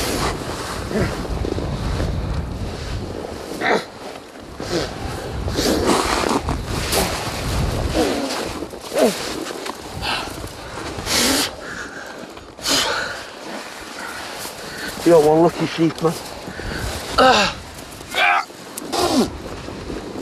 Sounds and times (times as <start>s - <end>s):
Speech: 15.0s - 16.2s.